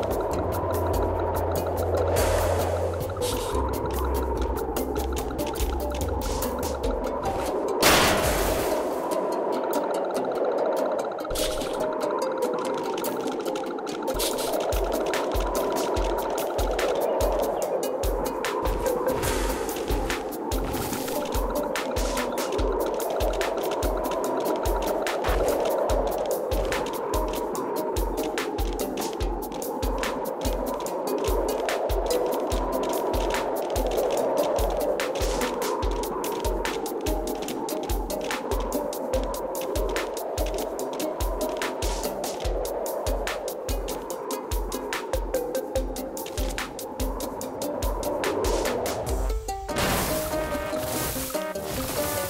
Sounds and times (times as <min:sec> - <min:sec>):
Music: 0:00.0 - 0:52.3.